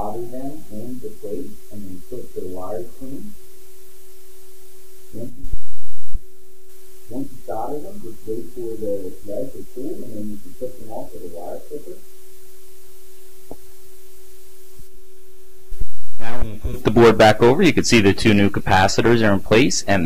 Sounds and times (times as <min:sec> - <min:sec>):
Speech: 0:00.0 - 0:03.3, 0:05.2 - 0:05.4, 0:07.1 - 0:12.0, 0:16.2 - 0:20.0.